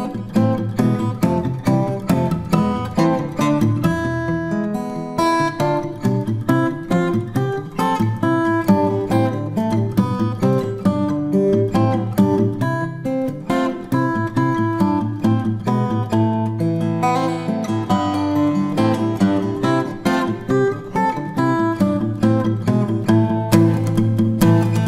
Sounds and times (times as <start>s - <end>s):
Strum: 0.0s - 24.8s.